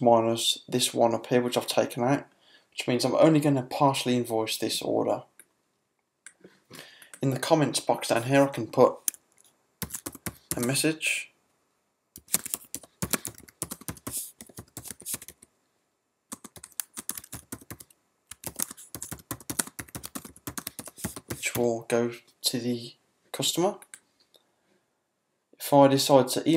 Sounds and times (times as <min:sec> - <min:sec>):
Computer keyboard: 0:09.8 - 0:10.8, 0:12.2 - 0:15.5, 0:16.3 - 0:21.7.